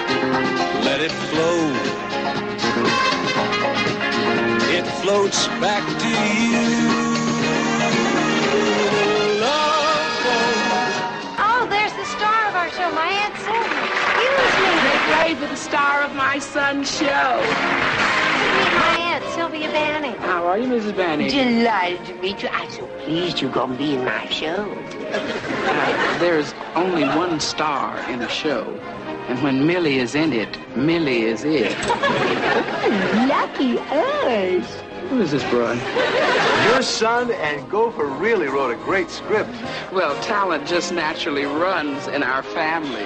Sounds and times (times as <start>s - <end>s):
Music: 0.0s - 43.0s.